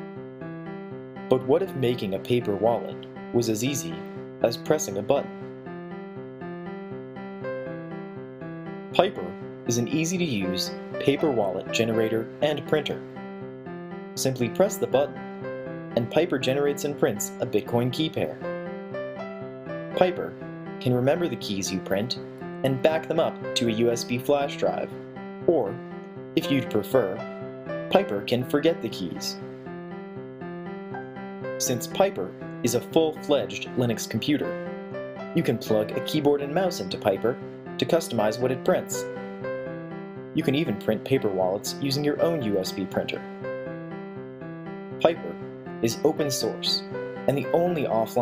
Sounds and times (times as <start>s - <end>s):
Music: 0.0s - 48.2s
Speech: 1.3s - 5.3s, 9.0s - 13.0s, 14.2s - 15.2s, 16.0s - 18.4s, 20.0s - 24.9s, 25.5s - 25.8s, 26.4s - 27.3s, 27.9s - 29.4s, 31.6s - 34.6s, 35.4s - 39.1s, 40.4s - 43.2s, 45.0s - 48.2s.